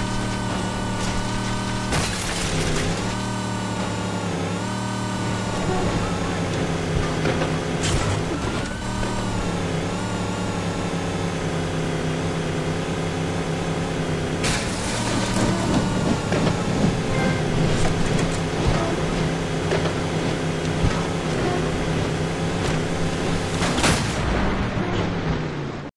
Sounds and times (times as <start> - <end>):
Vehicle: 0.0 - 25.9.